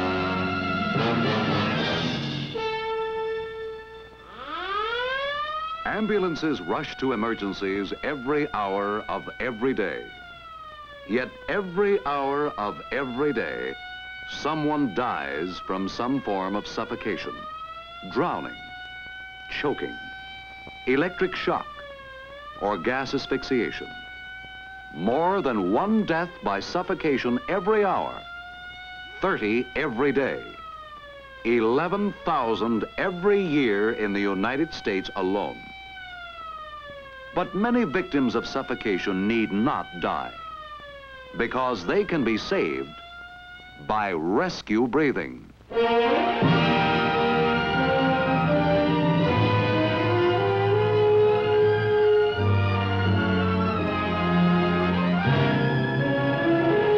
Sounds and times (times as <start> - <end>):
Speech: 5.9 - 10.2, 11.1 - 17.4, 18.0 - 18.6, 19.5 - 20.0, 20.9 - 21.7, 22.6 - 24.0, 25.0 - 28.2, 29.2 - 30.6, 31.5 - 35.7, 37.4 - 40.4, 41.4 - 43.0, 43.8 - 45.5.